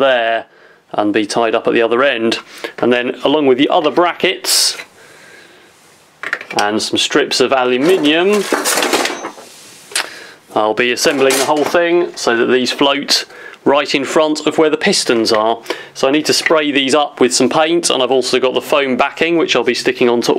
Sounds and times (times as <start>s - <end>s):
Speech: 0.0s - 4.9s, 6.5s - 8.6s, 10.5s - 20.3s
Inside, small room: 0.0s - 20.3s.